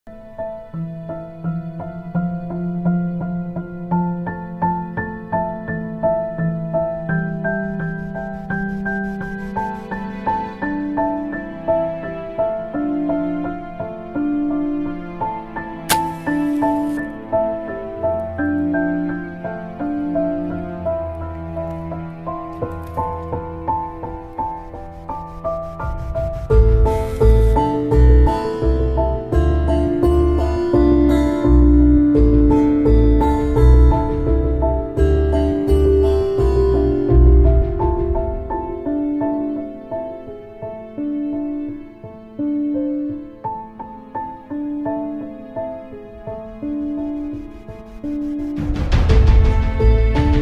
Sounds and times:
New-age music: 0.1s - 50.4s.

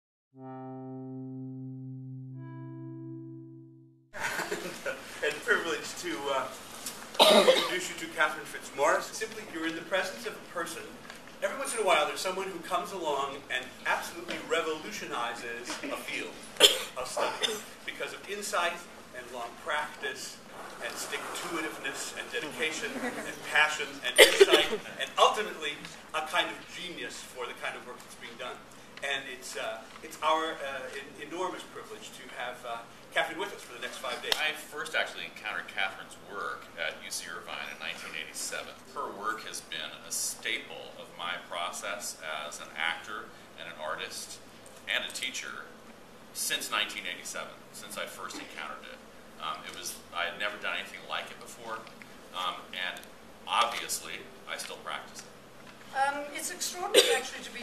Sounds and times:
Music: 0.4s - 4.2s
Laughter: 4.2s - 5.0s, 22.8s - 23.5s
Speech: 4.7s - 6.6s, 7.4s - 45.7s, 46.4s - 55.3s, 55.9s - 57.6s.

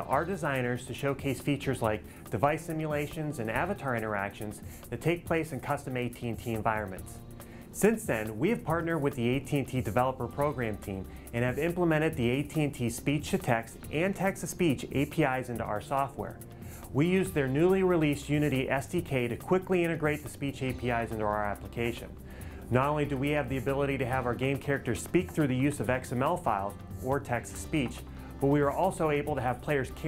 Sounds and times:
Male speech, man speaking: 0.0s - 7.2s, 7.8s - 30.0s
Music: 0.0s - 30.0s
Narration, monologue: 0.0s - 30.0s.

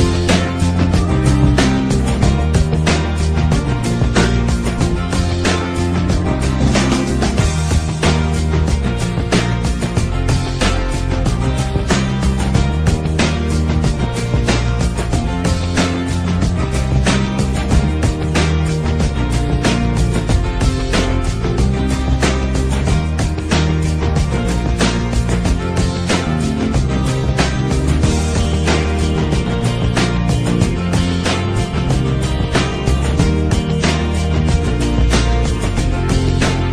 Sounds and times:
Rhythm and blues: 0.0s - 36.7s.

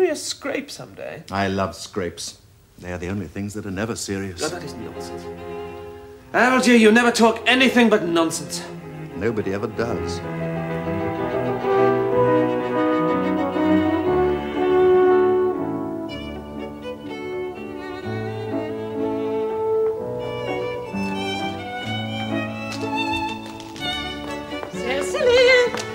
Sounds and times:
Cello: 4.4s - 25.9s.

